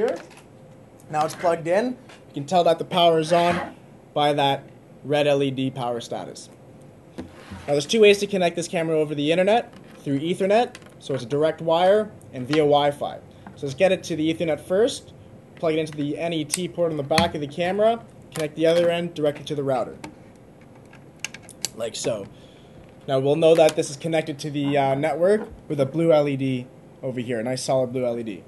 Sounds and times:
Speech: 0.0s - 0.3s, 1.1s - 6.6s, 7.7s - 20.0s, 21.7s - 22.3s, 23.1s - 28.4s.

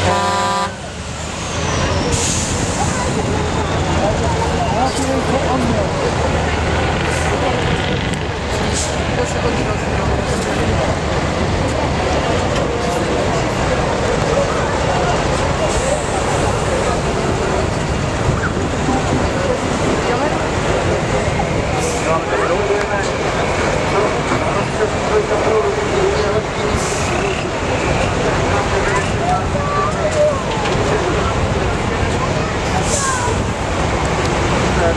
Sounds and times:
Truck: 0.0s - 34.9s
Speech: 1.8s - 34.9s.

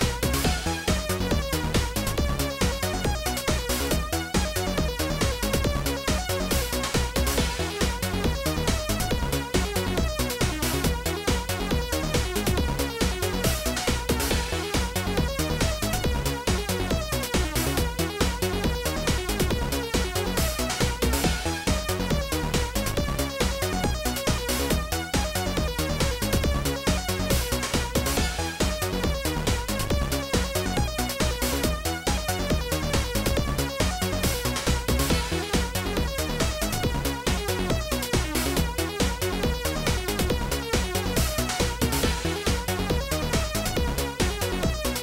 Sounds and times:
Music: 0.0s - 45.0s.

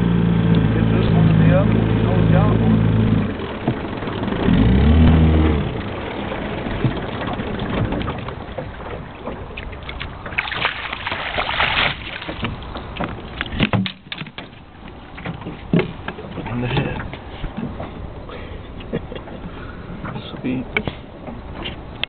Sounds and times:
Speech: 0.7s - 2.8s, 16.4s - 17.1s, 20.1s - 20.9s.

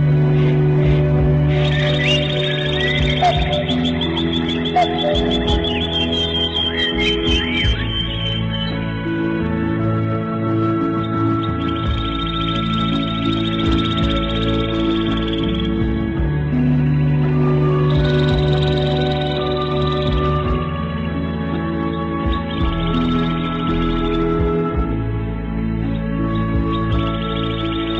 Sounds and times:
Music: 0.0s - 27.9s.

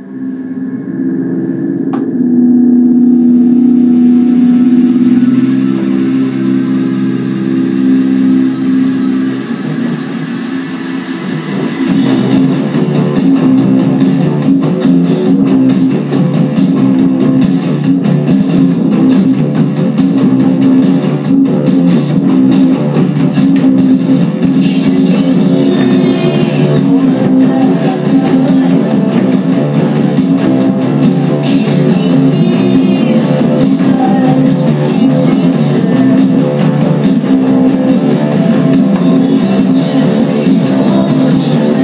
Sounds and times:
Bass guitar: 0.0s - 41.8s
Rock music: 0.0s - 41.8s.

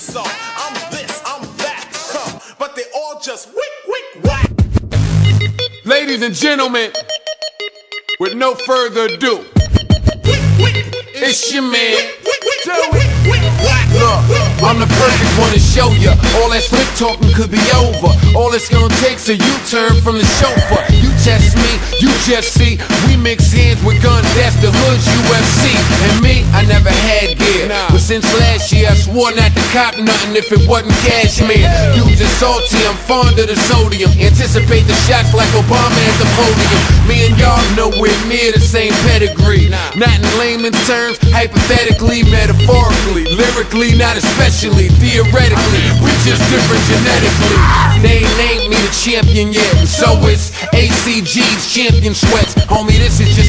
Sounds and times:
Music: 0.0s - 2.6s, 4.2s - 53.4s.

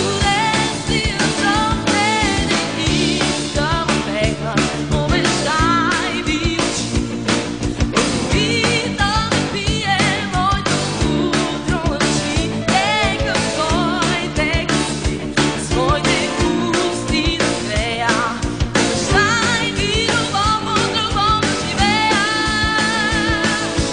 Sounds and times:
Rhythm and blues: 0.0s - 23.9s.

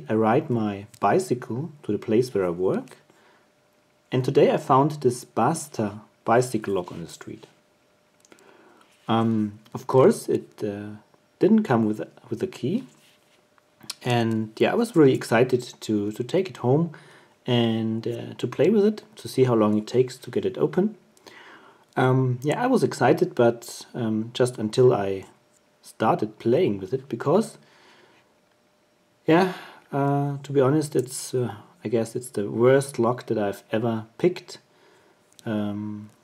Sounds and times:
Speech: 0.0s - 3.0s, 4.1s - 7.6s, 9.1s - 13.0s, 13.8s - 21.0s, 22.0s - 27.7s, 29.2s - 34.7s, 35.4s - 36.2s.

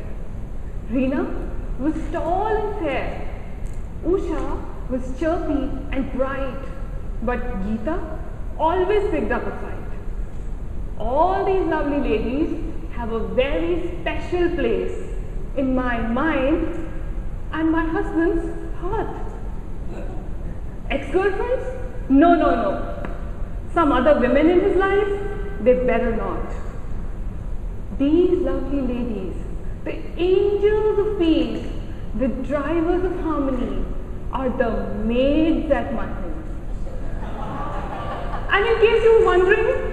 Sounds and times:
Female speech, woman speaking: 0.9s - 3.4s, 4.0s - 10.0s, 11.0s - 16.8s, 17.6s - 19.3s, 20.9s - 23.0s, 23.7s - 26.7s, 28.0s - 36.5s, 38.5s - 39.9s.

